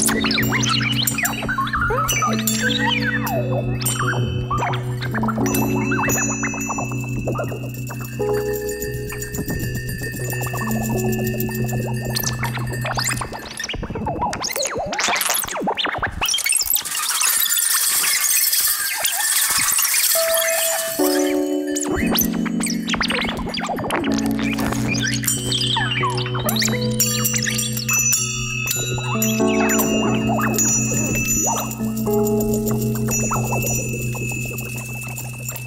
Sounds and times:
Percussion: 0.0 - 35.6.

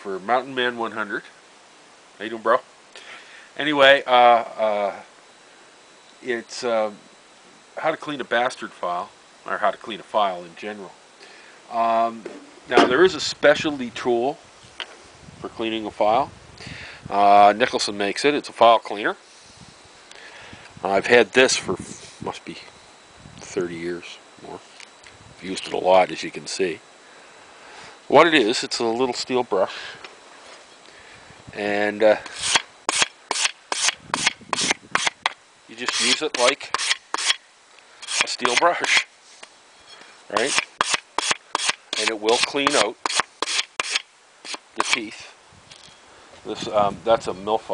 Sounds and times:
Speech: 0.0 - 1.4, 2.2 - 2.7, 3.6 - 5.1, 6.2 - 7.0, 7.8 - 11.0, 11.7 - 14.4, 15.4 - 16.3, 17.1 - 19.2, 20.8 - 22.7, 23.4 - 24.7, 25.4 - 26.8, 28.1 - 30.0, 31.6 - 32.3, 35.7 - 36.7, 38.2 - 39.1, 40.3 - 40.6, 42.0 - 43.0, 44.8 - 45.4, 46.4 - 47.7.

